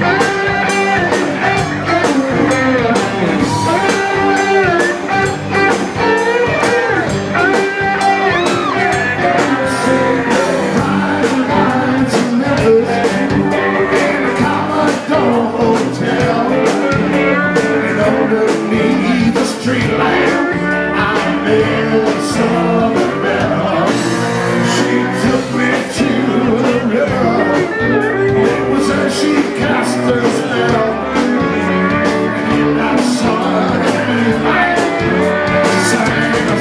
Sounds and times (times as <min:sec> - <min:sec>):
Music: 0:00.0 - 0:36.6.